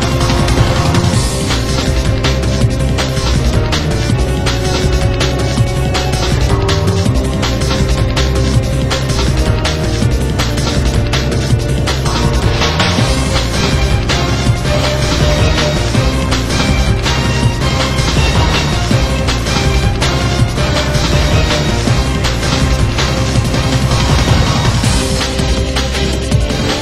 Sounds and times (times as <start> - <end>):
Music: 0.0 - 26.8.